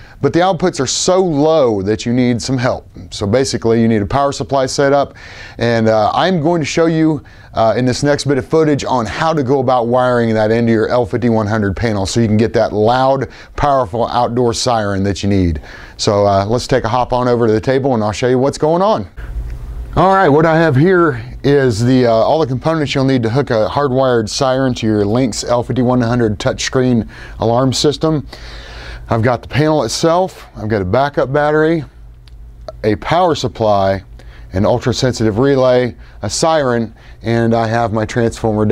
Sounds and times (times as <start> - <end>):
Speech: 0.2 - 19.2, 20.0 - 28.3, 29.1 - 32.0, 32.7 - 38.7.